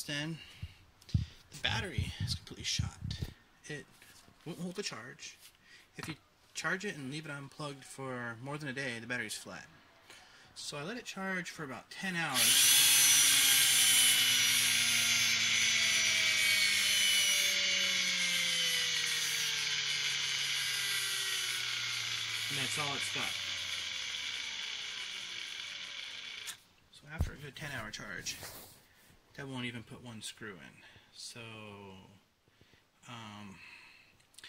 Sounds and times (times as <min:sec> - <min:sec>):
Power tool: 0:12.3 - 0:26.6.